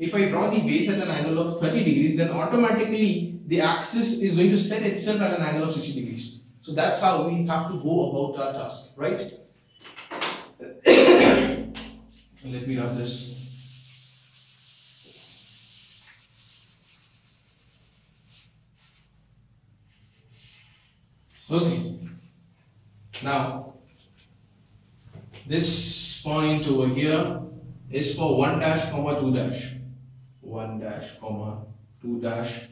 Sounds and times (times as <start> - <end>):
Speech: 0.0 - 9.4, 10.6 - 11.7, 12.4 - 13.5, 21.5 - 21.9, 23.2 - 23.7, 25.4 - 29.8, 30.4 - 32.7
Inside, small room: 0.0 - 32.7.